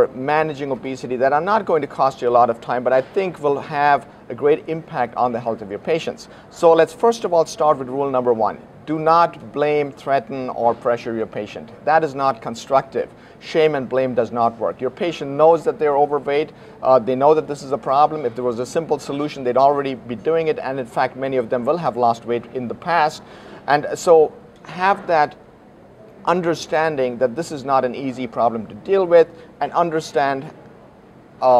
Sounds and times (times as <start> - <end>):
Speech: 0.0 - 25.4, 26.0 - 30.6.